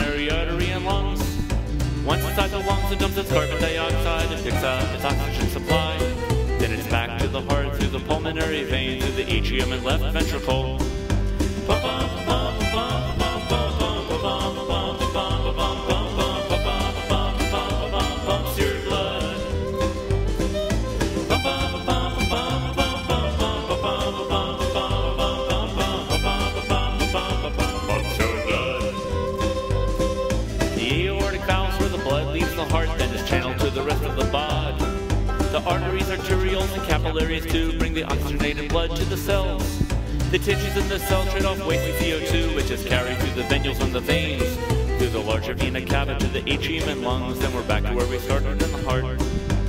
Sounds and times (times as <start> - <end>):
Music: 0.0 - 49.6.